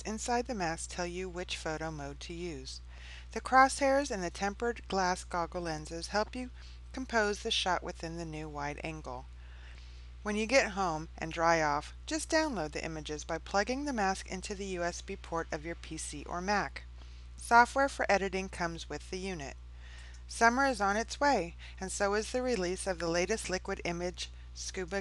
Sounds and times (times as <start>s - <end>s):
Speech: 0.0s - 2.8s, 3.4s - 9.3s, 10.3s - 19.6s, 20.3s - 25.0s.